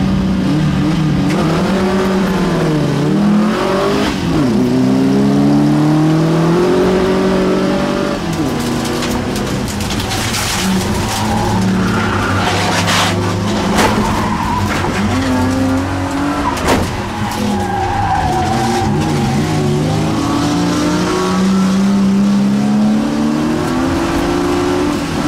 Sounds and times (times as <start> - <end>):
Skidding: 0.7 - 25.2.